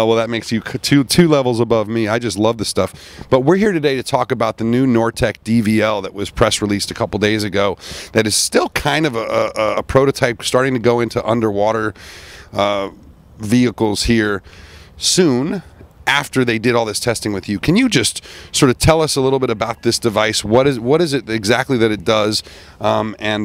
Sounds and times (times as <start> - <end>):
Speech: 0.0 - 12.0, 12.6 - 14.4, 15.0 - 23.4.